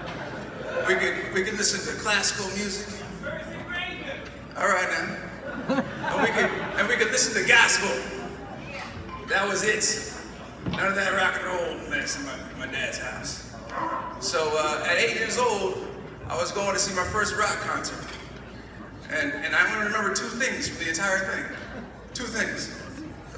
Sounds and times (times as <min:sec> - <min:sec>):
Male speech, man speaking: 0:00.8 - 0:05.3, 0:06.1 - 0:08.2, 0:09.3 - 0:10.2, 0:10.8 - 0:13.4, 0:14.2 - 0:18.2, 0:19.1 - 0:21.6, 0:22.2 - 0:22.9.